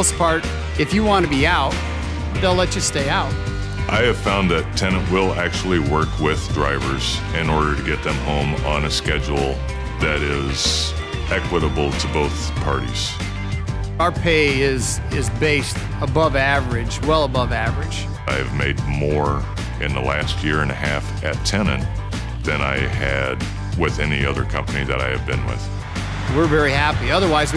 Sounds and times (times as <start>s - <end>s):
Music: 0.0s - 27.5s
Speech: 3.9s - 13.2s, 14.0s - 25.7s, 26.3s - 27.5s.